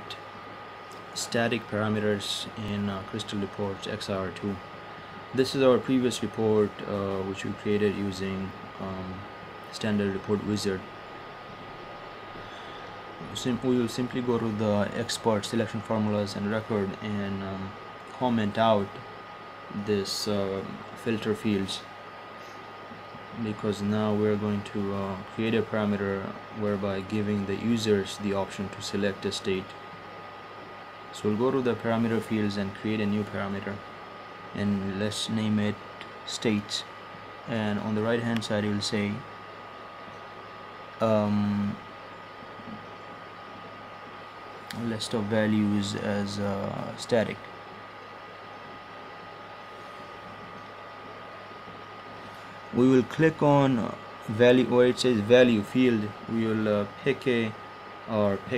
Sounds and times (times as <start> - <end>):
Speech: 1.2 - 4.7, 5.3 - 10.9, 13.2 - 19.0, 19.7 - 21.9, 23.3 - 29.8, 31.1 - 33.9, 34.5 - 39.3, 41.0 - 41.9, 44.7 - 47.5, 52.7 - 58.5.